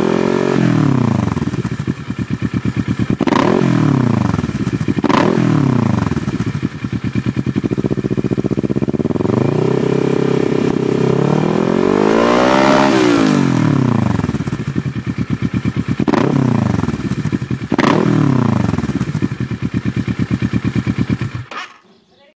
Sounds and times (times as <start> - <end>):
Speech: 21.8 - 22.3.